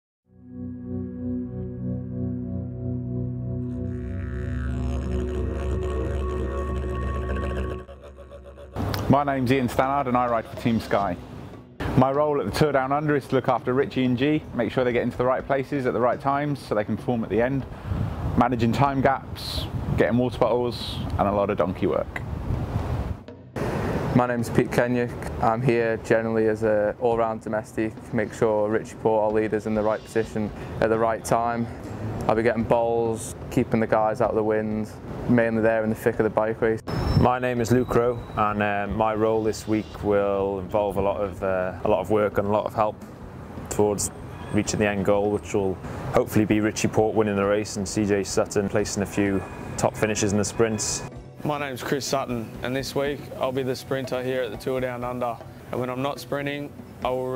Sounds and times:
Music: 0.3 - 14.2, 23.2 - 24.8, 35.9 - 44.4, 49.2 - 57.3
Speech: 9.0 - 11.2, 12.0 - 17.7, 18.4 - 22.2, 24.2 - 43.0, 43.7 - 57.3.

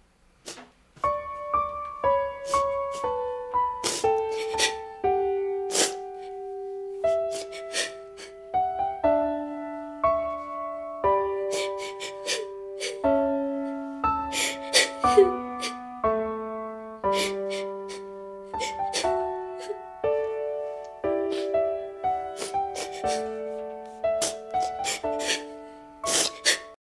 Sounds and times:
Music: 0.0 - 26.8.

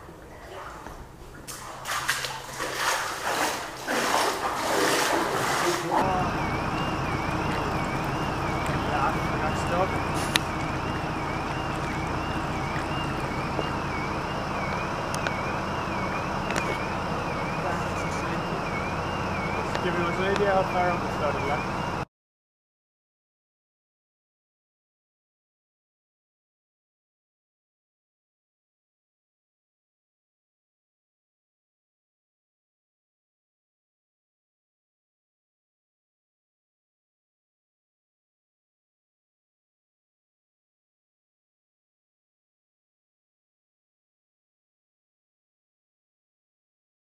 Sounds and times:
Speech: 5.6 - 6.3, 8.8 - 10.0, 17.6 - 18.6, 19.6 - 21.7.

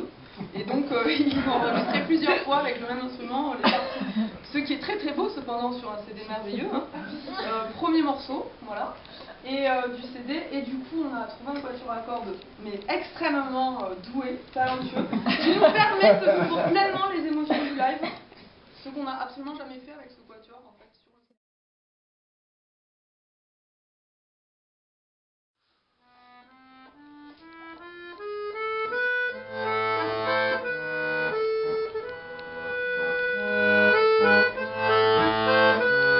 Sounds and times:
Classical music: 26.3 - 36.1.

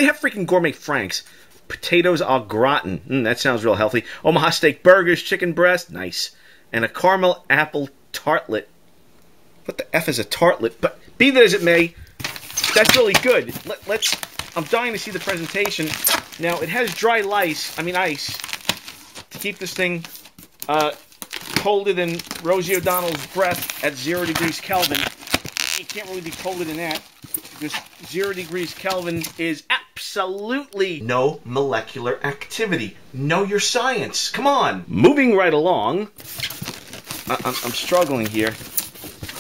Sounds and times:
Speech: 0.0 - 8.7, 9.7 - 12.0, 12.6 - 18.4, 19.4 - 20.1, 20.7 - 21.0, 21.6 - 25.1, 25.8 - 27.0, 27.6 - 36.2, 37.3 - 38.6.

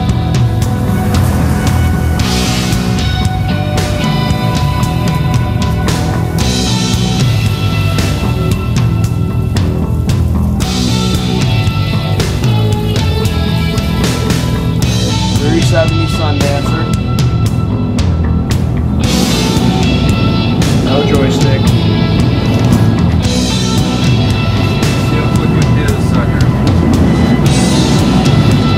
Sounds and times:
Music: 0.0 - 28.7.

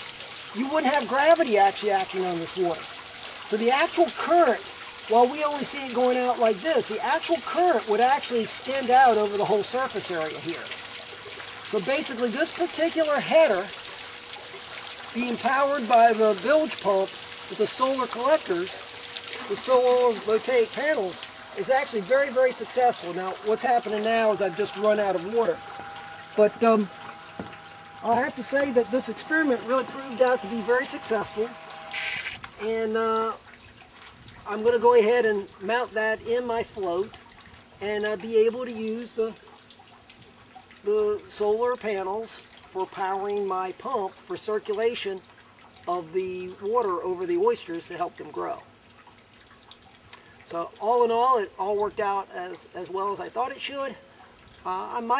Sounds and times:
Liquid: 0.0 - 55.1
Outside, rural or natural: 0.0 - 55.1
Speech: 0.6 - 2.8, 3.5 - 10.7, 11.7 - 13.7, 15.2 - 18.8, 19.4 - 25.6, 26.4 - 26.9, 28.0 - 31.6, 32.6 - 33.4, 34.5 - 37.1, 37.8 - 39.4, 40.9 - 45.2, 45.9 - 48.6, 50.5 - 54.0, 54.6 - 55.1.

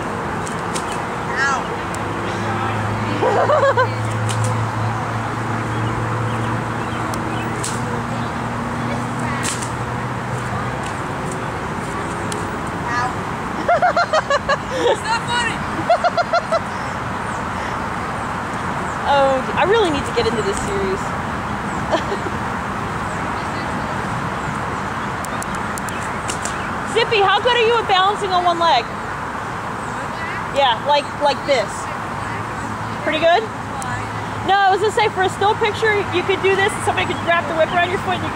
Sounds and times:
Speech: 19.1 - 21.1, 30.0 - 38.3.

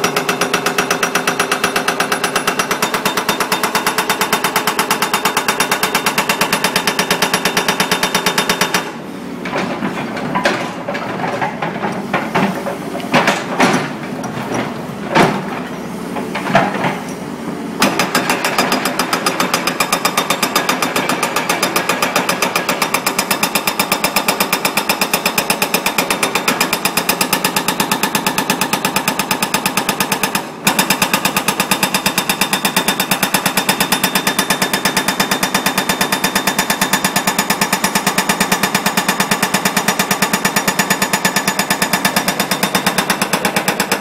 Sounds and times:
Jackhammer: 0.0 - 9.0, 17.8 - 44.0.

